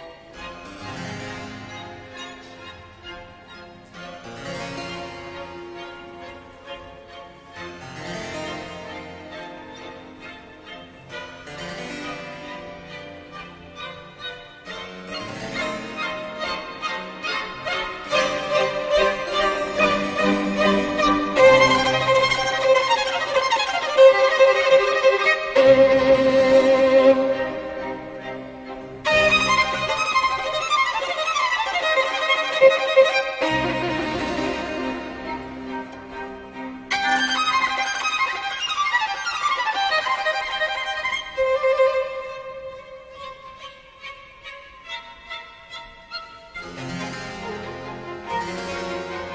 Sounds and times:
Violin, fiddle: 0.0s - 49.3s.

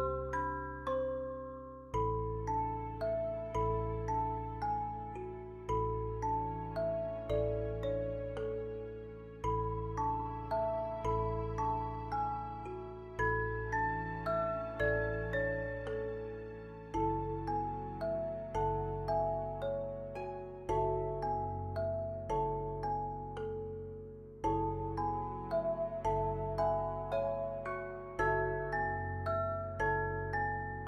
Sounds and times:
Music: 0.0s - 30.8s.

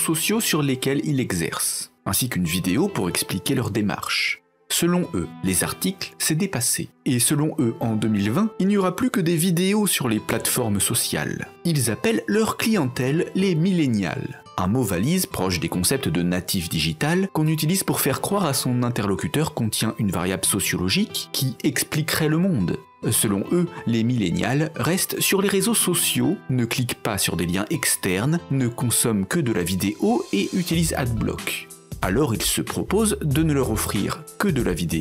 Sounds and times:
Music: 0.0s - 35.0s
Speech: 0.0s - 35.0s.

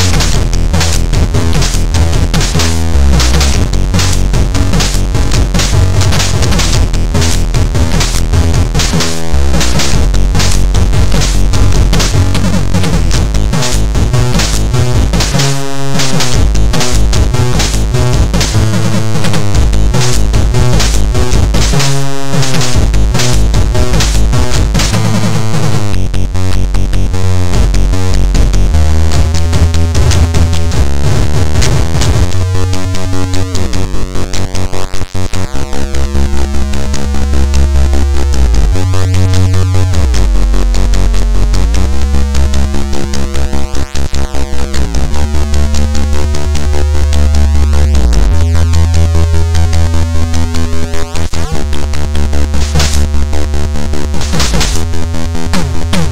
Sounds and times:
Exciting music: 0.0s - 56.1s.

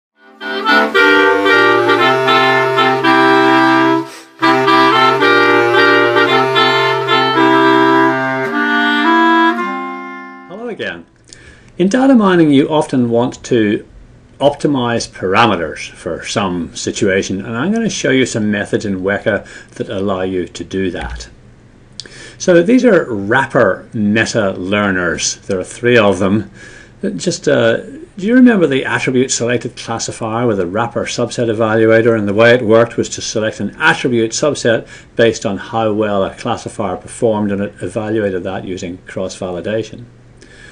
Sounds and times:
Clarinet: 0.2s - 10.9s.

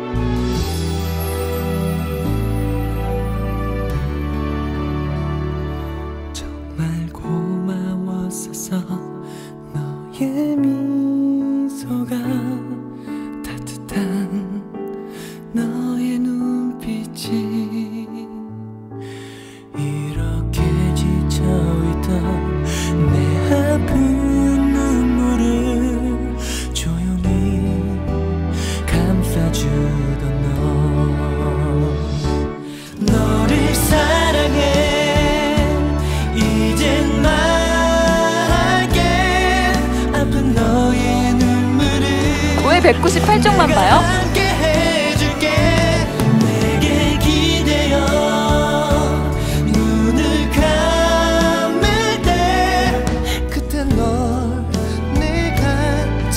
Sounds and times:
Music: 0.0s - 56.3s.

